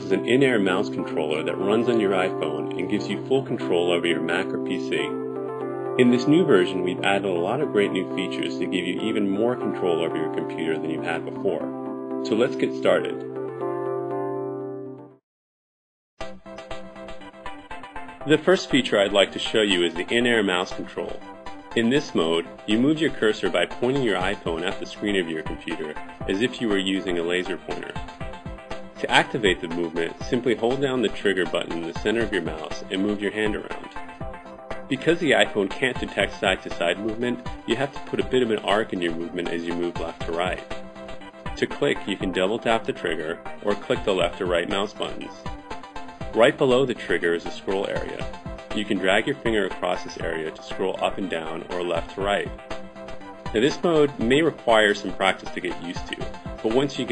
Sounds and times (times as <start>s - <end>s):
Speech: 0.0s - 5.2s, 6.0s - 13.2s, 18.2s - 28.0s, 29.0s - 33.9s, 34.9s - 40.6s, 41.6s - 45.5s, 46.3s - 52.6s, 53.5s - 57.1s
Music: 0.0s - 15.2s, 16.2s - 57.1s.